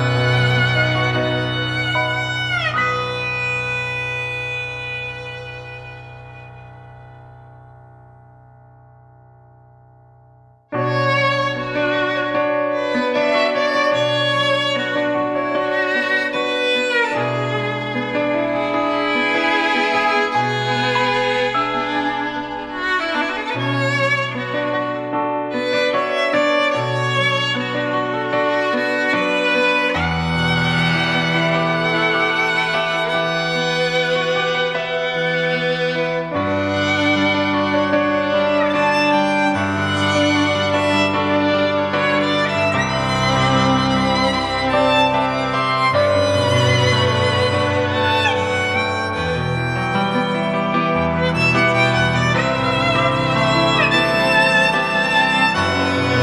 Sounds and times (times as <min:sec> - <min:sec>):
Violin, fiddle: 0:00.0 - 0:06.6, 0:10.8 - 0:56.2.